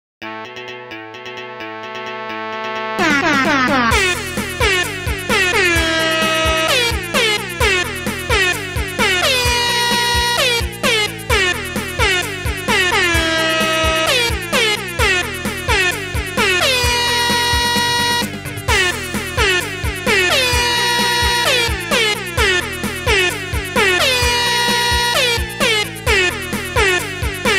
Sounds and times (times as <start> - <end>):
Music: 0.2 - 27.5
Air horn, truck horn: 3.0 - 27.5.